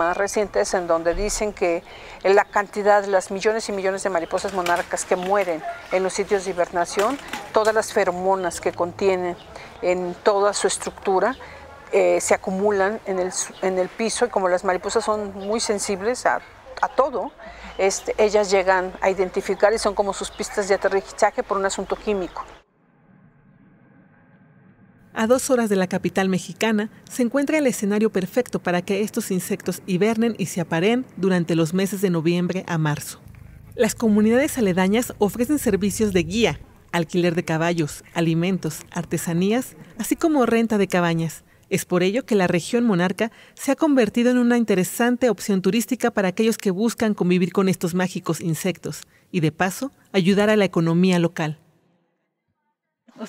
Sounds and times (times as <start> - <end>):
Speech: 0.0 - 22.6, 25.2 - 33.2, 33.8 - 51.6.